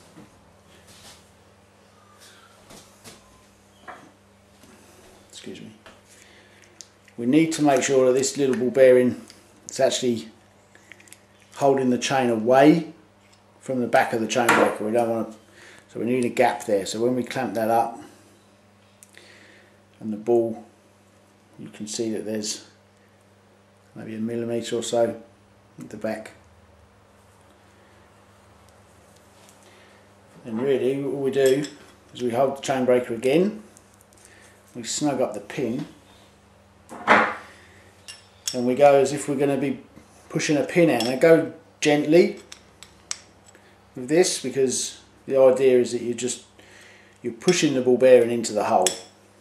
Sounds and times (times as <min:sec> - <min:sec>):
Speech: 0:05.4 - 0:05.8, 0:07.2 - 0:10.4, 0:11.6 - 0:13.0, 0:13.6 - 0:18.1, 0:20.0 - 0:20.7, 0:21.6 - 0:22.8, 0:24.0 - 0:26.4, 0:30.4 - 0:33.6, 0:34.8 - 0:36.0, 0:38.5 - 0:42.4, 0:44.0 - 0:46.5, 0:47.2 - 0:49.0.